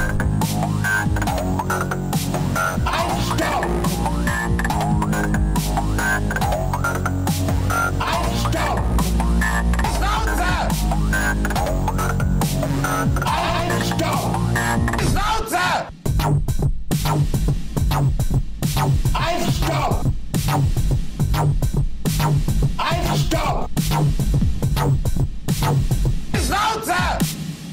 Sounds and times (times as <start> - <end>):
Dubstep: 0.0 - 27.7
Speech: 9.9 - 10.7, 13.3 - 14.3, 15.0 - 15.9, 19.2 - 20.0, 22.8 - 23.7, 26.4 - 27.2.